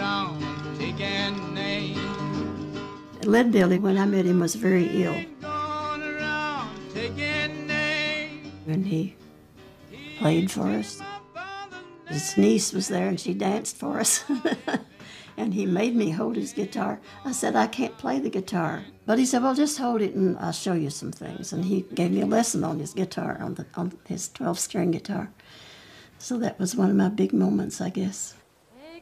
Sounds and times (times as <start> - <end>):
Folk music: 0.0 - 24.0
Speech: 3.2 - 5.3, 8.7 - 9.2, 10.2 - 11.0, 12.1 - 14.8, 15.4 - 25.3, 26.2 - 28.4.